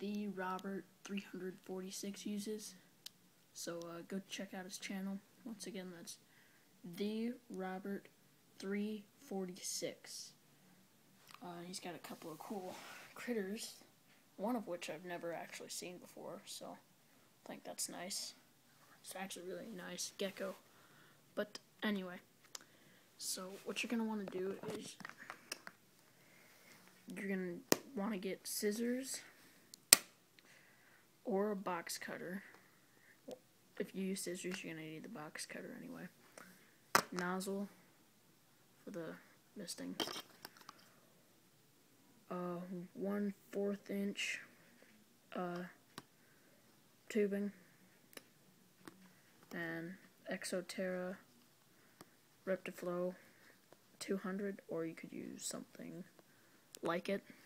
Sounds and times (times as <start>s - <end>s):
Speech: 0.0s - 2.8s, 3.6s - 6.2s, 6.8s - 10.4s, 11.3s - 16.8s, 17.4s - 18.4s, 19.0s - 20.6s, 21.4s - 22.3s, 23.2s - 25.0s, 27.1s - 29.4s, 31.2s - 32.5s, 33.3s - 36.2s, 37.1s - 37.8s, 38.8s - 40.1s, 42.3s - 44.6s, 45.3s - 45.8s, 47.1s - 47.6s, 49.5s - 51.3s, 52.4s - 53.2s, 54.0s - 56.1s, 56.8s - 57.4s.